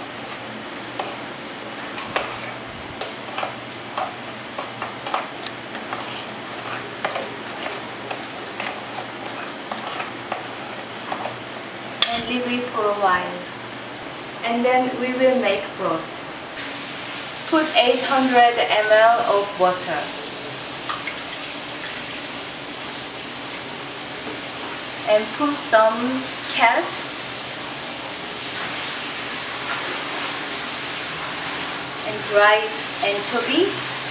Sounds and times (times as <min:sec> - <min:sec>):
Speech: 0:12.0 - 0:13.5, 0:14.4 - 0:16.1, 0:17.5 - 0:20.2, 0:25.1 - 0:27.0, 0:32.1 - 0:33.8.